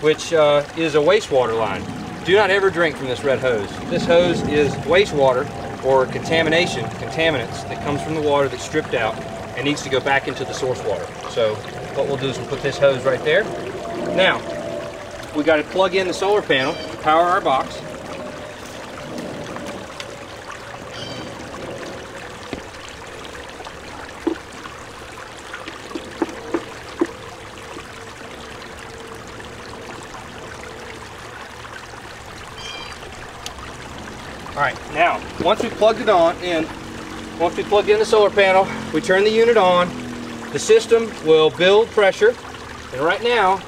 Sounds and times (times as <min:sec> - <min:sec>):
Stream: 0:00.0 - 0:43.6.